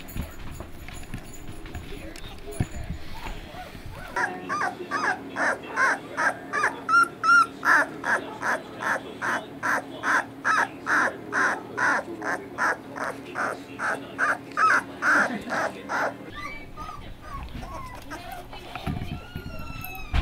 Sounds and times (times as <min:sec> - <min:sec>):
Dog: 0:00.0 - 0:20.2
Speech: 0:01.8 - 0:20.1.